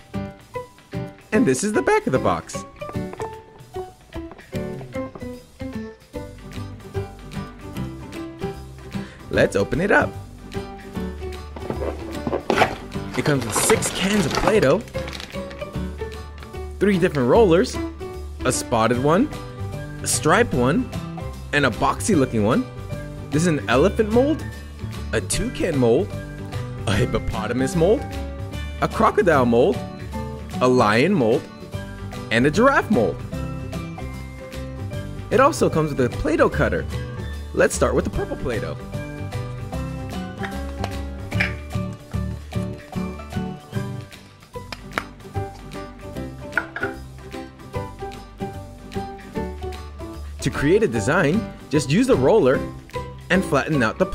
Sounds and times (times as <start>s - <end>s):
Music: 0.0s - 54.1s
Speech: 1.3s - 2.6s, 9.3s - 10.2s, 13.1s - 14.9s, 16.8s - 17.8s, 18.4s - 19.3s, 20.0s - 20.9s, 21.5s - 22.7s, 23.3s - 24.4s, 25.1s - 26.1s, 26.8s - 28.0s, 28.8s - 29.8s, 30.6s - 31.5s, 32.3s - 33.2s, 35.3s - 36.9s, 37.6s - 38.8s, 50.4s - 52.7s, 53.3s - 54.1s.